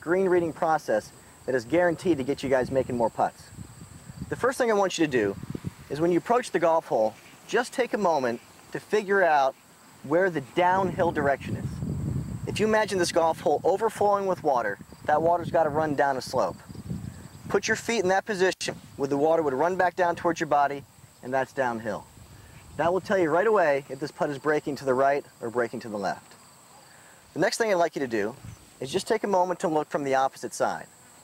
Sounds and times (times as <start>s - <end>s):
Speech: 0.0s - 3.5s, 4.3s - 11.8s, 12.5s - 16.6s, 17.5s - 22.1s, 22.8s - 26.4s, 27.4s - 30.9s.